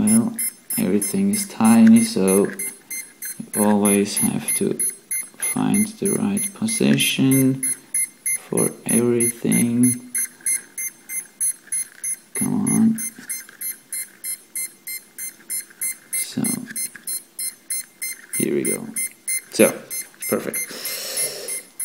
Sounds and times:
Speech: 0.0 - 2.6, 3.4 - 4.8, 5.4 - 7.6, 8.4 - 10.0, 12.4 - 13.0, 16.2 - 16.8, 18.4 - 19.0, 19.6 - 20.7.

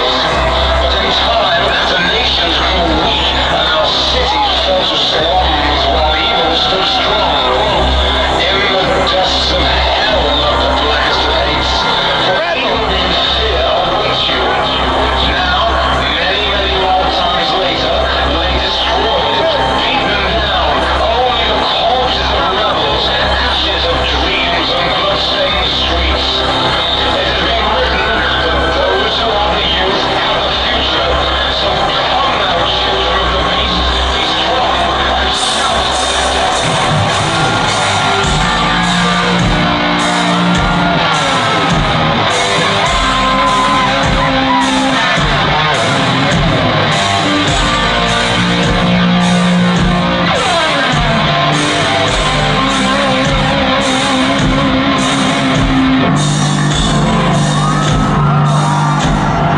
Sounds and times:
Music: 0.0 - 59.5
Speech: 0.0 - 59.5.

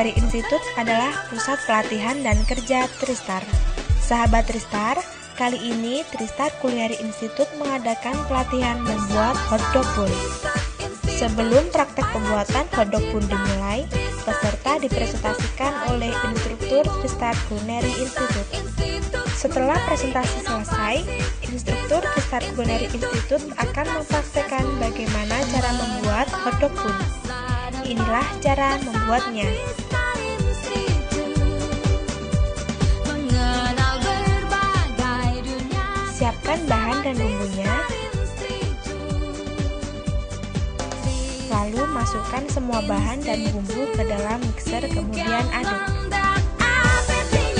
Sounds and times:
Speech: 0.0 - 3.5, 4.1 - 10.2, 11.1 - 18.5, 19.4 - 27.1, 27.8 - 29.6, 36.2 - 38.0, 41.5 - 46.0
Music: 0.0 - 47.6.

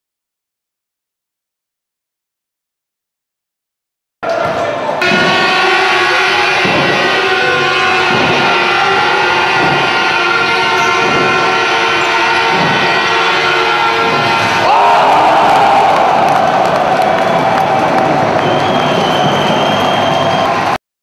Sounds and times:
Music: 4.4 - 14.7, 15.5 - 20.8.

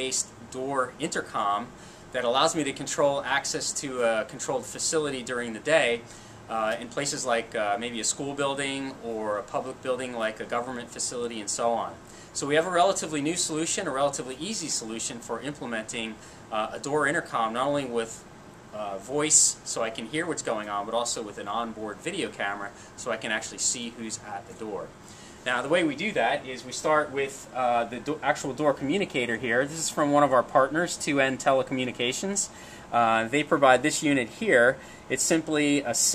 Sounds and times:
Speech: 0.0 - 36.1.

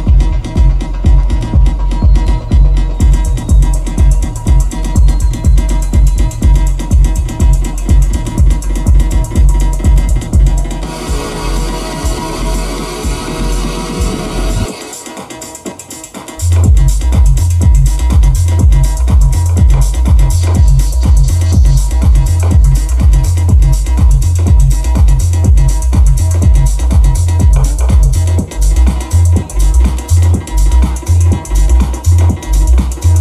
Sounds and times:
Electronic music: 0.0 - 33.2.

